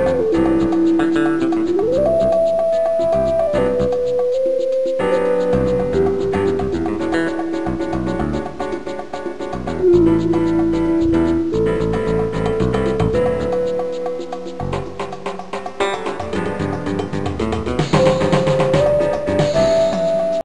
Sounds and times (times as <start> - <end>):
Jazz: 0.0 - 20.4.